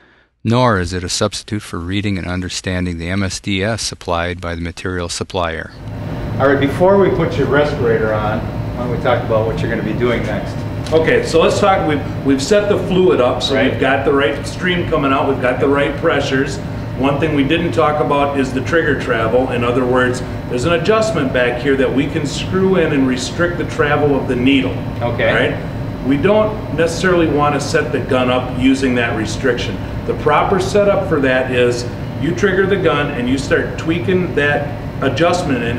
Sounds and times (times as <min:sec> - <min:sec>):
Speech: 0:00.5 - 0:05.8, 0:06.4 - 0:35.7.